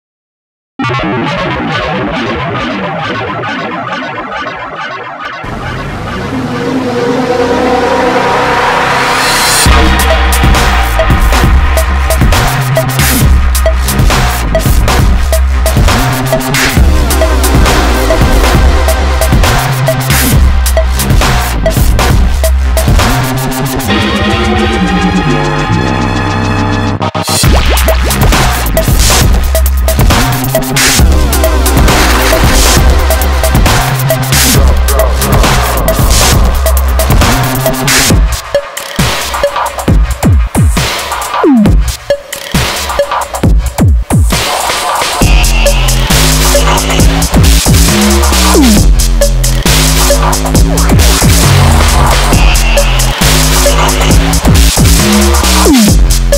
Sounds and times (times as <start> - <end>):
Music: 0.8 - 56.3.